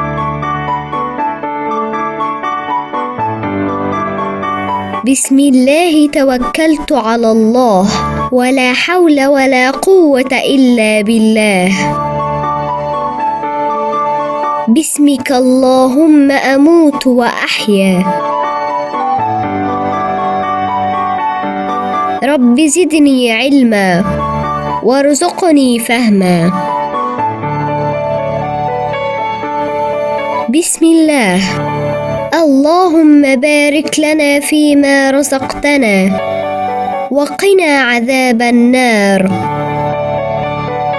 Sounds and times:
Music: 0:00.0 - 0:40.9
Speech: 0:05.0 - 0:11.9, 0:14.7 - 0:18.2, 0:22.2 - 0:24.2, 0:24.8 - 0:26.7, 0:30.5 - 0:31.6, 0:32.3 - 0:36.2, 0:37.1 - 0:39.4.

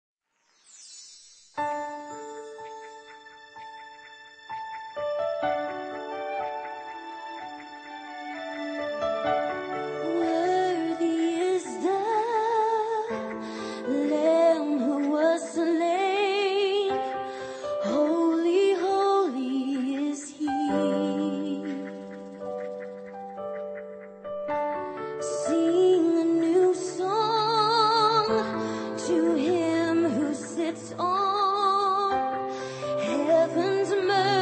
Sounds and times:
Music: 0:00.6 - 0:34.4.

